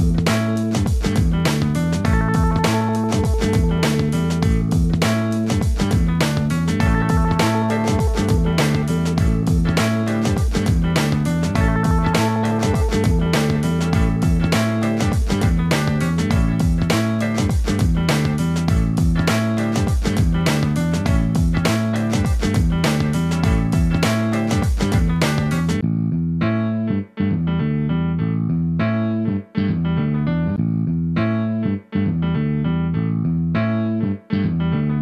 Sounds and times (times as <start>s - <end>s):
Music: 0.0s - 35.0s.